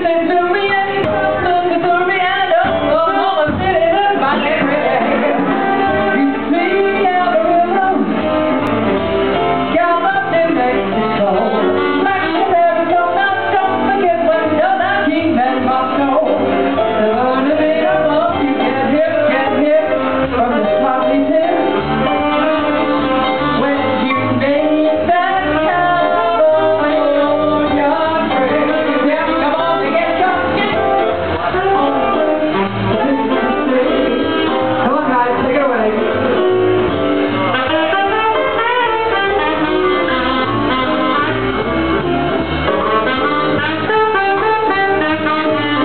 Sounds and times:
Jazz: 0:00.0 - 0:45.8.

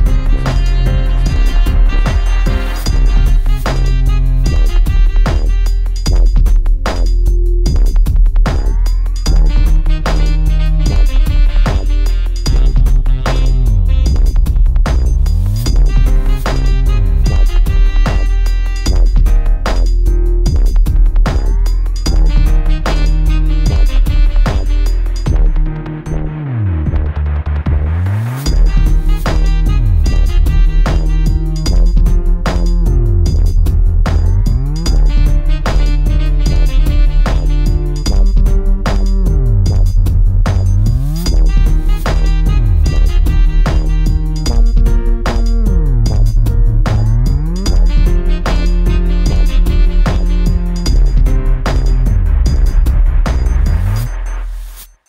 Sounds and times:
Drum machine: 0:00.0 - 0:55.0.

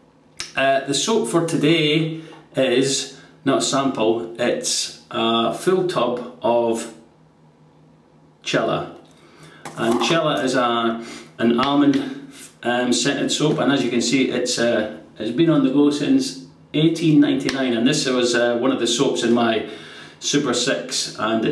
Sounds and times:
Speech: 0:00.4 - 0:07.1, 0:08.4 - 0:09.1, 0:09.7 - 0:21.5.

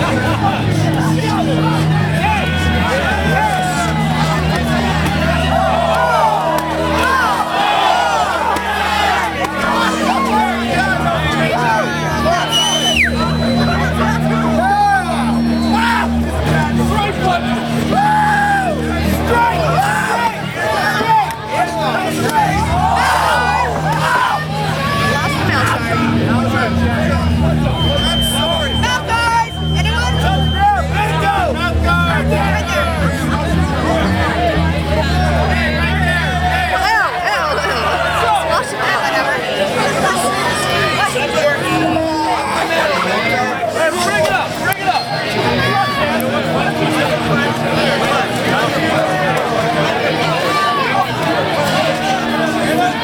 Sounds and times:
Music: 0:00.0 - 0:53.0
Speech: 0:00.0 - 0:53.0.

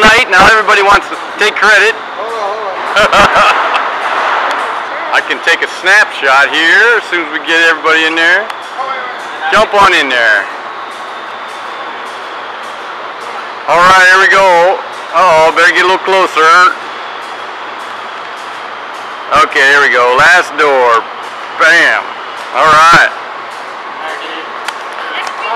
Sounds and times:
Speech: 0:00.0 - 0:02.8, 0:04.6 - 0:10.5, 0:13.7 - 0:16.8, 0:19.3 - 0:21.0, 0:21.6 - 0:23.2.

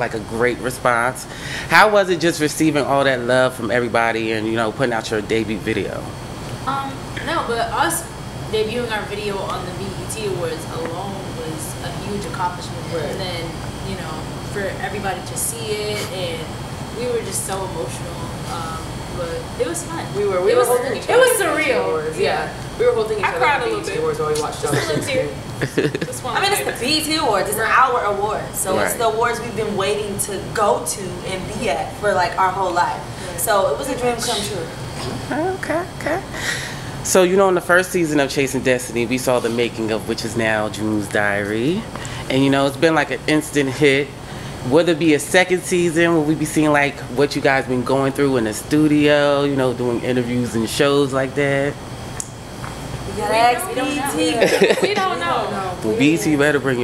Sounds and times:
Speech: 0:00.0 - 0:06.1, 0:06.7 - 0:36.4, 0:37.1 - 0:51.8, 0:53.1 - 0:56.8.

